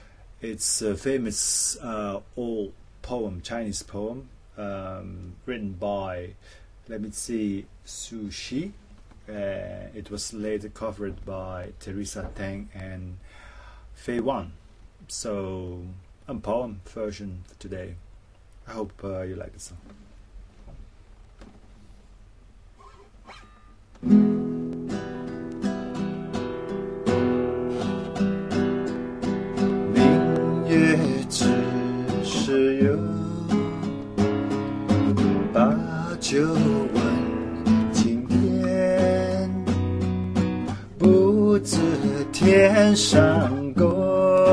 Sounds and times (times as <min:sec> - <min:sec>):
Acoustic guitar: 0:22.8 - 0:44.5
Strum: 0:22.8 - 0:44.5.